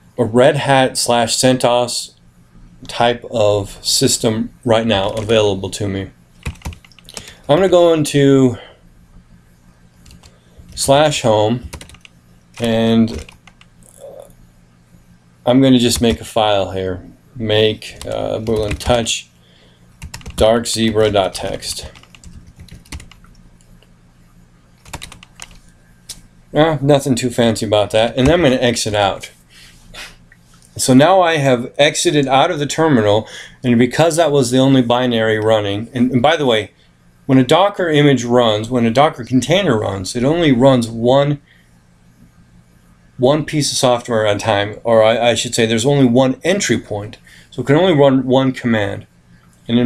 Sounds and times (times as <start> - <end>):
Speech: 0.2 - 2.2, 2.8 - 6.2, 7.5 - 8.7, 10.8 - 11.7, 12.6 - 13.3, 13.9 - 14.3, 15.4 - 19.3, 20.4 - 22.0, 26.5 - 29.4, 30.8 - 41.4, 43.2 - 49.1.